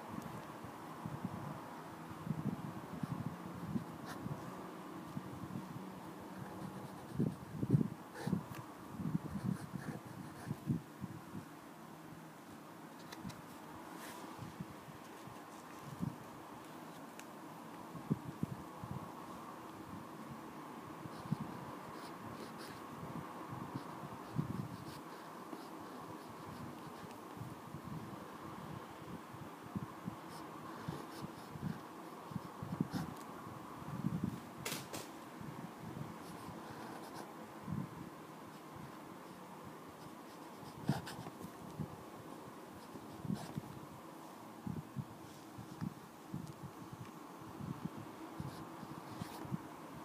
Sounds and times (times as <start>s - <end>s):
Writing: 6.4s - 7.5s, 9.3s - 10.6s, 21.1s - 22.9s, 23.7s - 27.2s, 30.2s - 33.2s, 36.2s - 37.3s, 40.0s - 41.5s, 42.8s - 43.6s, 48.4s - 49.5s.